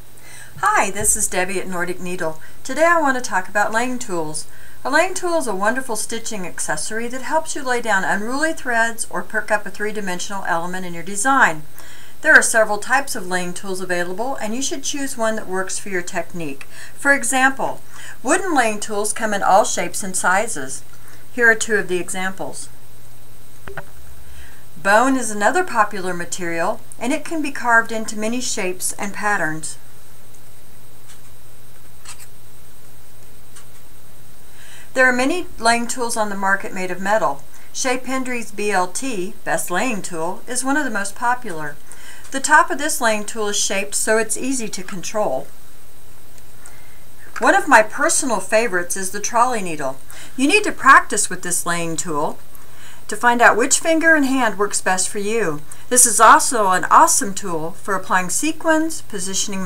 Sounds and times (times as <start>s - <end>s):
Speech: 0.6s - 20.8s, 21.4s - 22.7s, 24.8s - 29.8s, 35.0s - 45.5s, 47.4s - 52.4s, 53.1s - 59.6s.